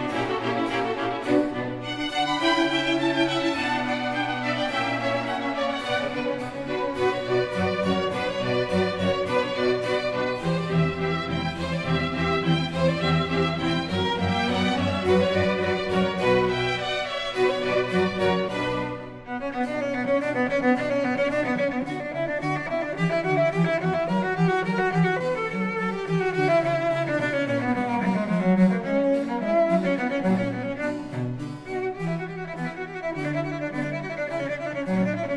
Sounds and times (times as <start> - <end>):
Cello: 0.0 - 35.3.